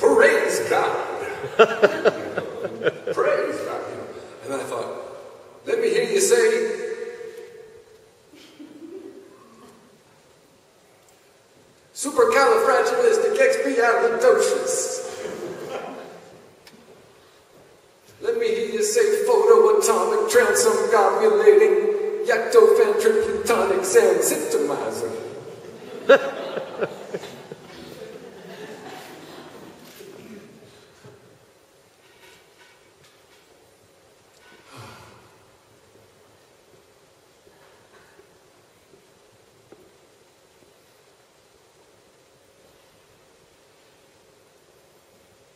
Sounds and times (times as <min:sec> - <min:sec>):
Speech: 0:00.0 - 0:01.4, 0:03.1 - 0:06.8, 0:12.0 - 0:16.2, 0:18.2 - 0:25.4.